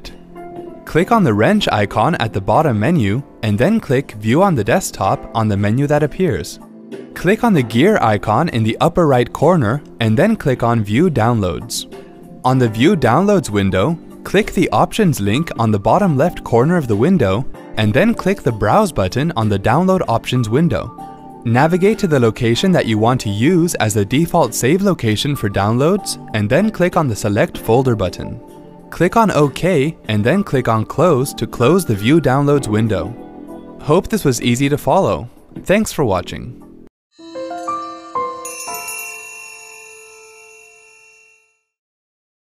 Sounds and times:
Music: 0:00.0 - 0:40.7
Speech: 0:00.9 - 0:06.6, 0:07.2 - 0:20.9, 0:21.5 - 0:33.2, 0:33.8 - 0:36.6.

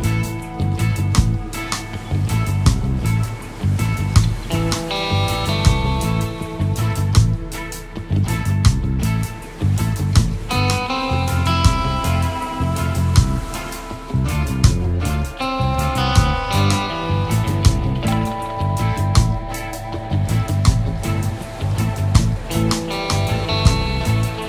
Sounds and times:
Music: 0:00.0 - 0:24.4.

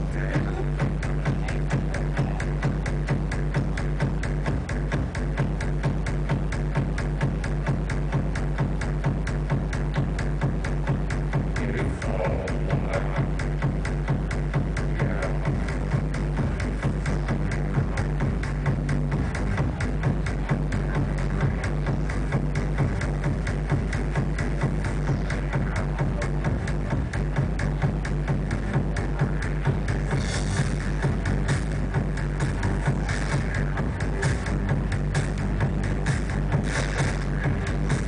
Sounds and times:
Music: 0:00.0 - 0:38.0.

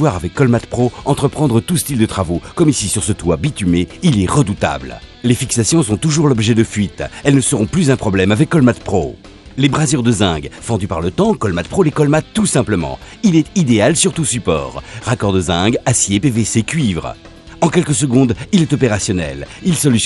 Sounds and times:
Music: 0:00.0 - 0:20.0
Speech: 0:00.0 - 0:20.0.

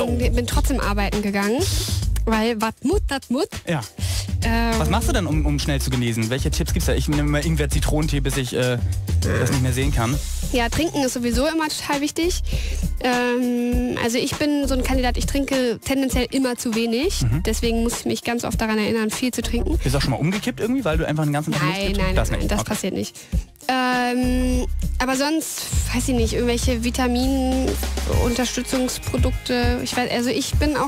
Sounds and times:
Speech: 0:00.0 - 0:12.4, 0:13.0 - 0:23.1, 0:23.7 - 0:30.8
Music: 0:00.0 - 0:30.8.

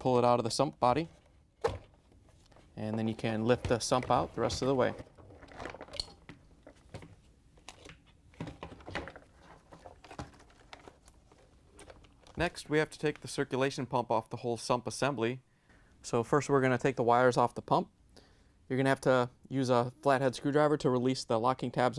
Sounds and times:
Speech: 0:00.0 - 0:01.1, 0:02.8 - 0:05.0, 0:12.4 - 0:15.4, 0:16.0 - 0:17.9, 0:18.7 - 0:21.9.

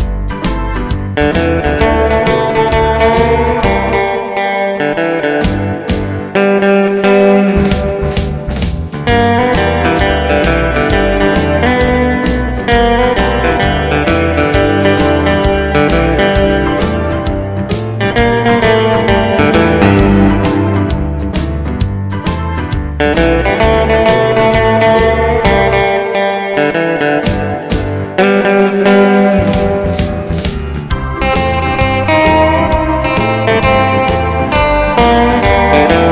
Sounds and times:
Background music: 0:00.0 - 0:36.1
Guitar: 0:00.0 - 0:36.1.

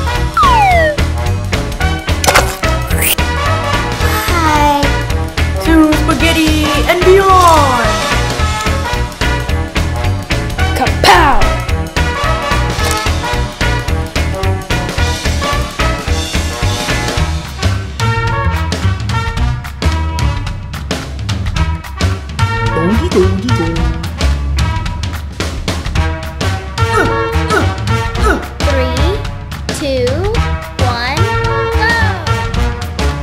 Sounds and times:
Music: 0:00.0 - 0:33.2.

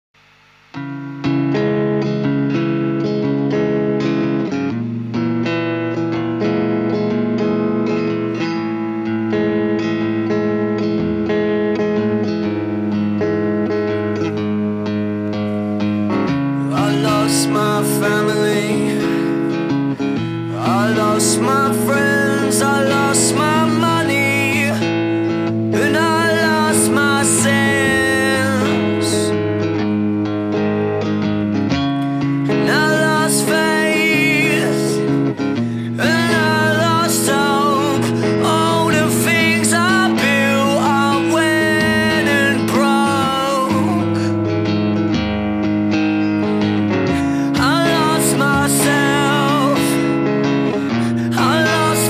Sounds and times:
Music: 0:00.0 - 0:52.0.

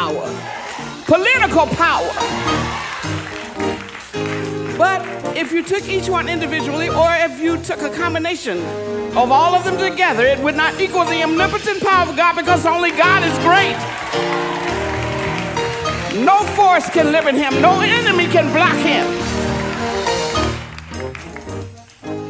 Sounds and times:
Music: 0:00.0 - 0:22.3
Speech: 0:01.1 - 0:02.2, 0:04.8 - 0:08.6, 0:09.2 - 0:13.8, 0:16.1 - 0:19.1.

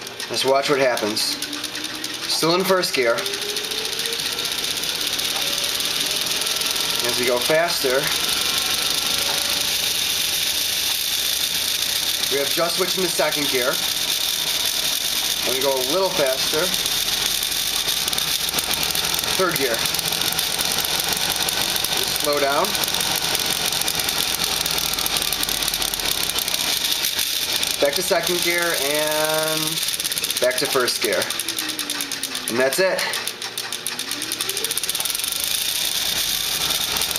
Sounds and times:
Speech: 0:00.3 - 0:01.4, 0:02.3 - 0:03.3, 0:07.0 - 0:08.2, 0:12.3 - 0:13.8, 0:15.4 - 0:16.8, 0:19.4 - 0:19.9, 0:22.0 - 0:22.8, 0:27.8 - 0:29.8, 0:30.4 - 0:31.4, 0:32.5 - 0:33.2.

